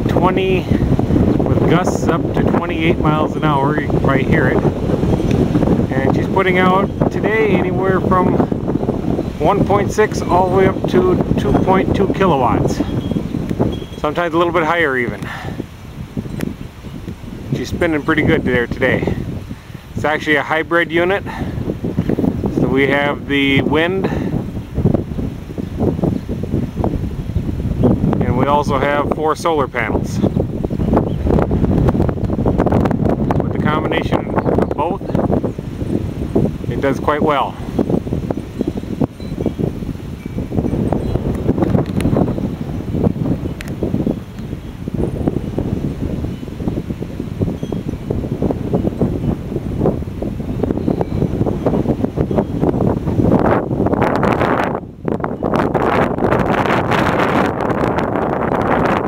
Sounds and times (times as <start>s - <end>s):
Wind noise (microphone): 0.0s - 59.0s
Speech: 0.1s - 0.8s, 1.5s - 4.6s, 5.9s - 8.5s, 9.4s - 12.9s, 14.0s - 15.3s, 17.5s - 19.2s, 20.0s - 21.3s, 22.6s - 24.3s, 28.2s - 30.3s, 33.4s - 35.2s, 36.7s - 37.6s.